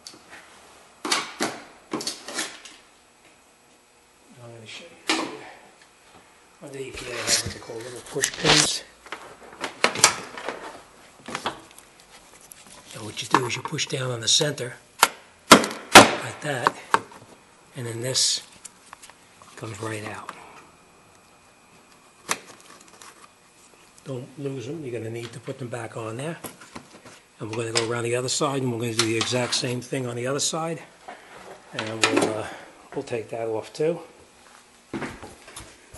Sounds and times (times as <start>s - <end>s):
Speech: 4.3s - 5.5s, 6.6s - 8.9s, 12.9s - 14.8s, 16.2s - 16.9s, 17.8s - 18.5s, 19.6s - 20.4s, 24.0s - 26.4s, 27.4s - 30.9s, 31.7s - 34.2s.